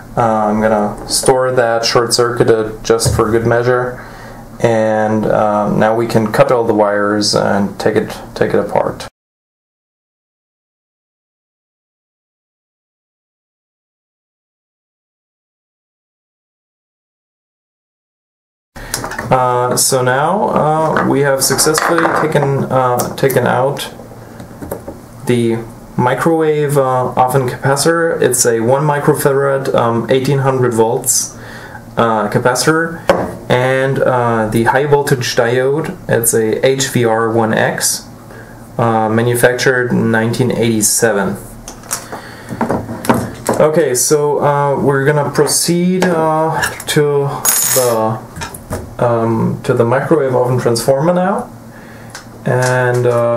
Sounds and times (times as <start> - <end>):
Speech: 0.2 - 4.0, 4.6 - 9.2, 19.3 - 24.0, 25.2 - 31.4, 32.0 - 38.1, 38.8 - 41.6, 43.5 - 48.3, 49.0 - 51.5, 52.4 - 53.3.